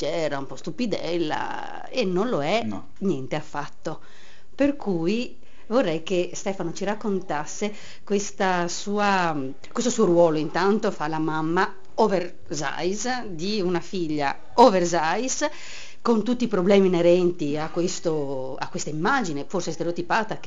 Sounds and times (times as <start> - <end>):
Speech: 0.0 - 4.0, 4.6 - 20.4.